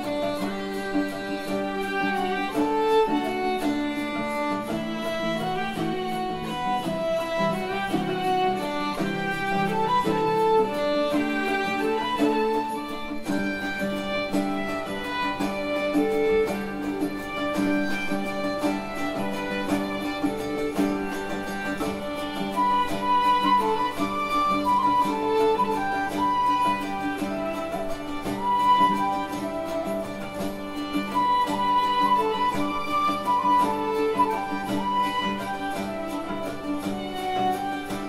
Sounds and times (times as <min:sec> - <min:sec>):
Music: 0:00.0 - 0:38.0.